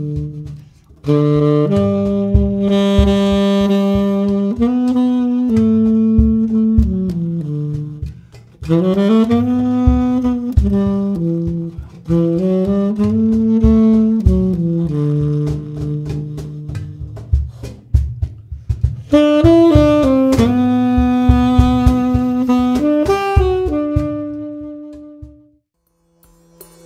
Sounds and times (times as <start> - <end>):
Percussion: 0.0 - 26.8.